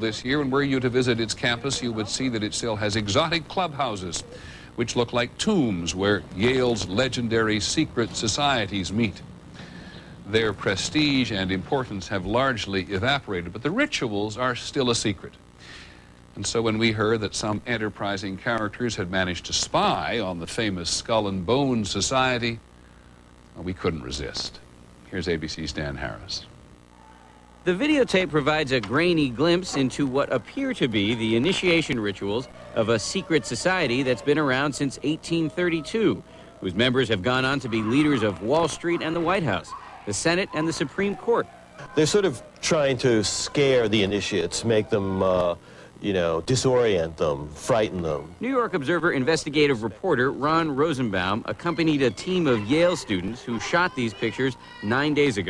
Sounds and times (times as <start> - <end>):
Speech: 0.0 - 9.2, 10.3 - 15.4, 16.4 - 22.6, 27.7 - 55.5.